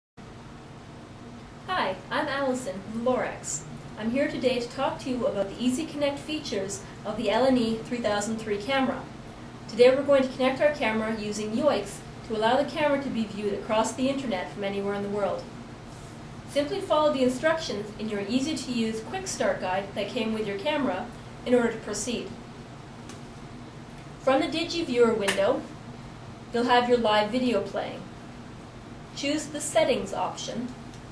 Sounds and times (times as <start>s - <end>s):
Speech: 1.7s - 9.1s, 9.7s - 15.5s, 16.5s - 22.4s, 24.2s - 25.7s, 26.5s - 28.1s, 29.2s - 30.8s.